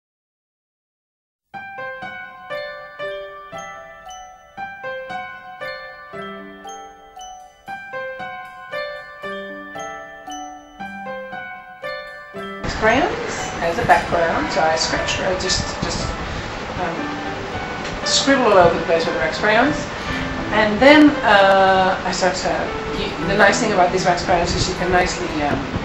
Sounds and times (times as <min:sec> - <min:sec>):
Glockenspiel: 0:01.6 - 0:25.8.